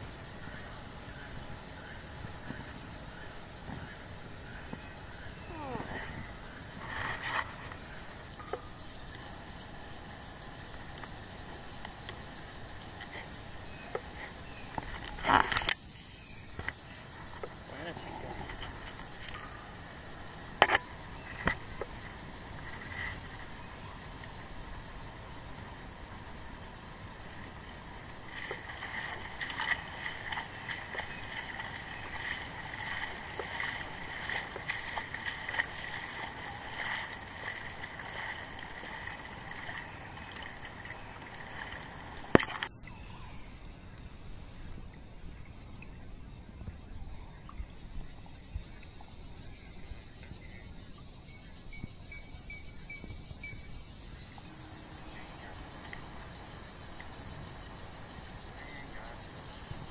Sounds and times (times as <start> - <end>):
Speech: 17.7 - 18.6.